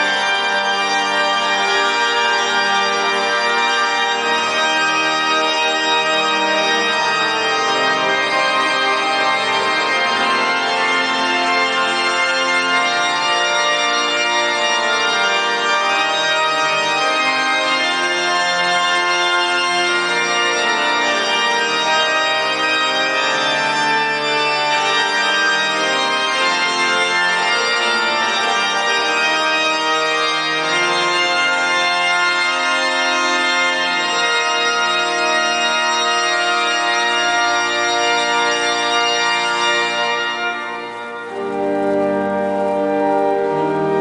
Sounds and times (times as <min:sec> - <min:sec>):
Music: 0:00.0 - 0:44.0.